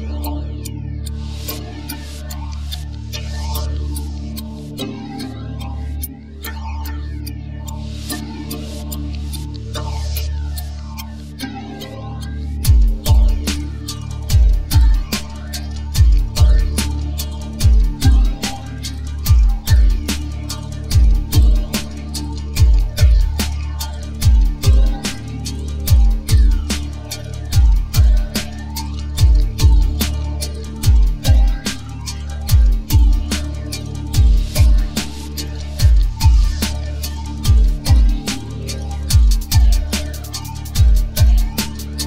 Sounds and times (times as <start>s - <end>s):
Techno: 0.0s - 42.0s.